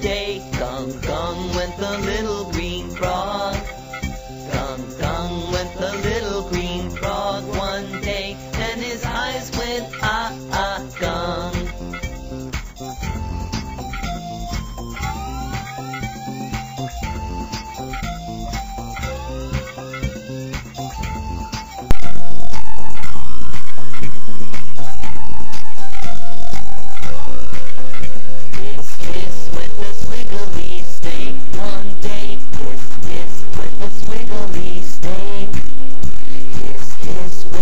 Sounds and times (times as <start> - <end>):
Music: 0.0 - 37.6.